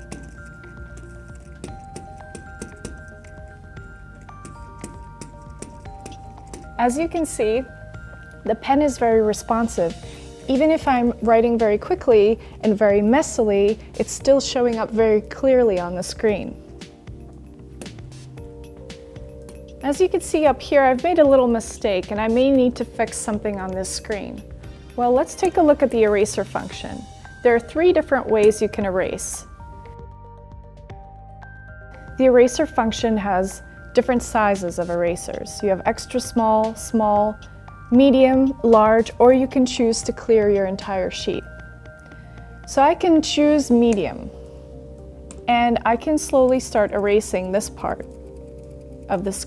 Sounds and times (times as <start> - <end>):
Music: 0.0 - 49.4
Speech: 19.8 - 24.4, 25.0 - 29.4, 45.5 - 48.0, 49.1 - 49.4.